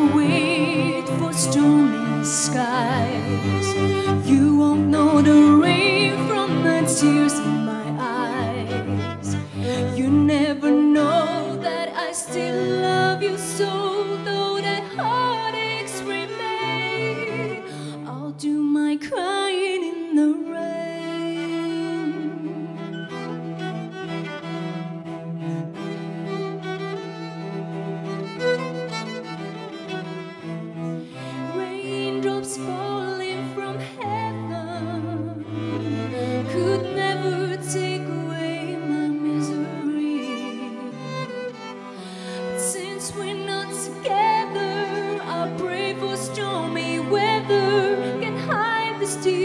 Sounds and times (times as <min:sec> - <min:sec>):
Music: 0:00.0 - 0:49.4.